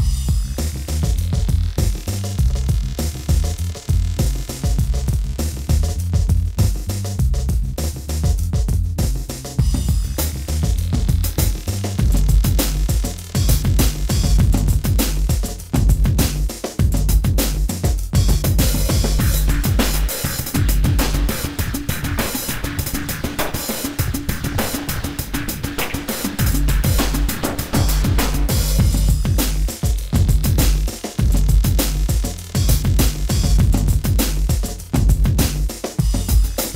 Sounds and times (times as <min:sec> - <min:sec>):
Drum machine: 0:00.0 - 0:36.7.